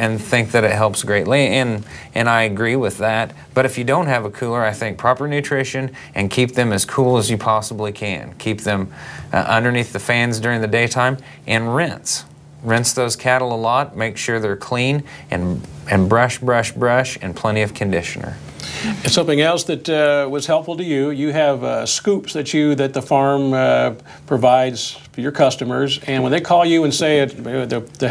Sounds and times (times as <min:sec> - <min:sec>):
Speech: 0:00.0 - 0:28.1.